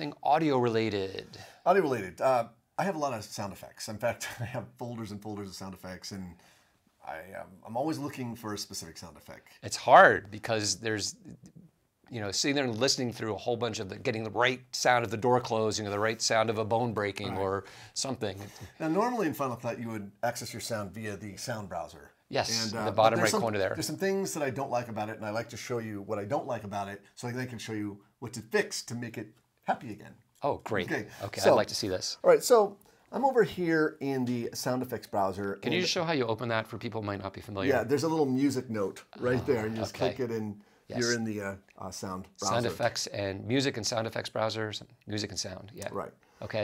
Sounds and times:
Speech: 0.0s - 6.4s, 7.0s - 11.4s, 12.1s - 46.6s.

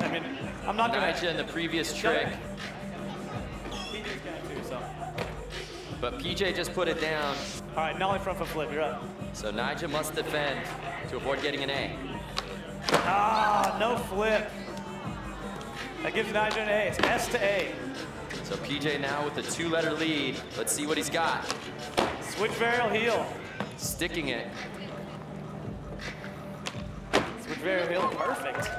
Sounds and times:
Speech: 0.0s - 2.4s
Music: 0.0s - 28.7s.

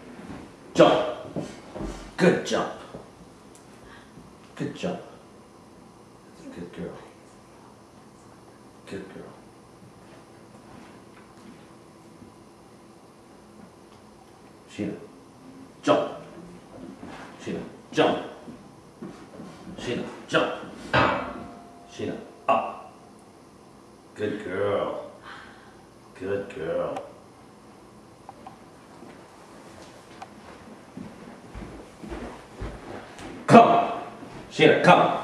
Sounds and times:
Speech: 0.8s - 1.2s, 2.2s - 3.0s, 4.6s - 5.2s, 6.3s - 7.4s, 8.0s - 9.4s, 14.7s - 15.1s, 15.8s - 16.5s, 17.4s - 18.4s, 19.8s - 20.7s, 21.9s - 22.8s, 24.2s - 25.2s, 26.2s - 27.1s, 33.5s - 35.2s.

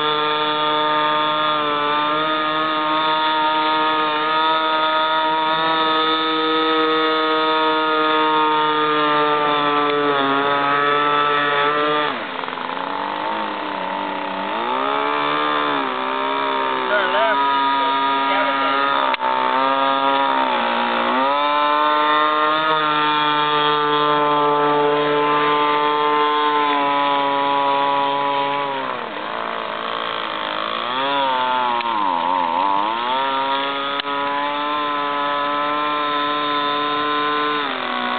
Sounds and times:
Motorboat, speedboat: 0.0s - 38.1s.

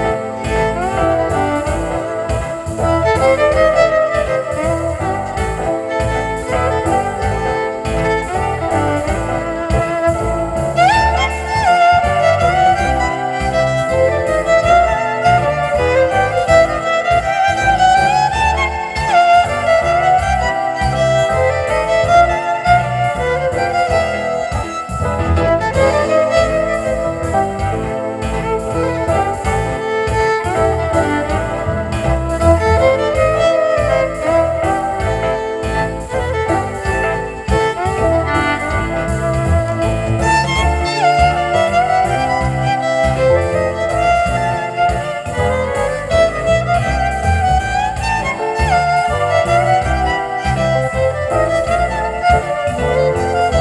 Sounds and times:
Violin, fiddle: 0.0s - 53.6s.

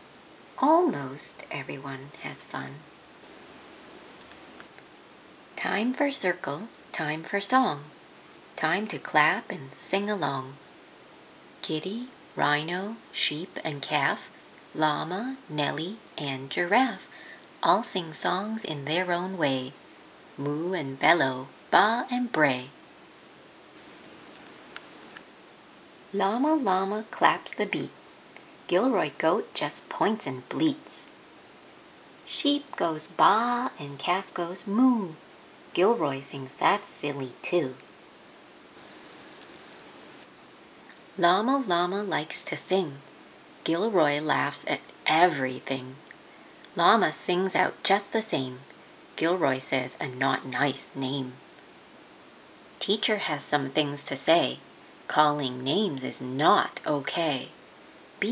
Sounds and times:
Speech: 0.6s - 2.9s, 5.6s - 8.0s, 8.6s - 10.6s, 11.6s - 19.8s, 20.4s - 22.8s, 26.1s - 28.0s, 28.7s - 31.1s, 32.3s - 35.2s, 35.8s - 37.8s, 41.2s - 46.1s, 46.8s - 51.4s, 52.8s - 57.6s.

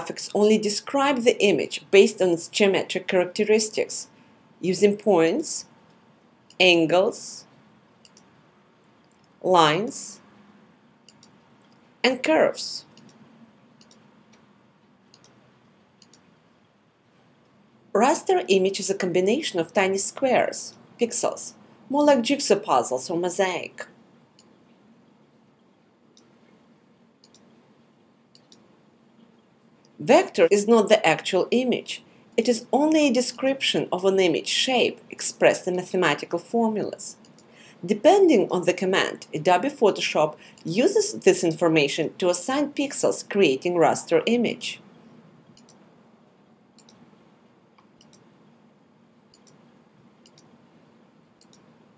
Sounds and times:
Speech: 0.0s - 5.7s, 6.6s - 7.5s, 9.4s - 10.2s, 12.0s - 13.0s, 18.0s - 23.9s, 30.0s - 37.2s, 37.8s - 44.8s.

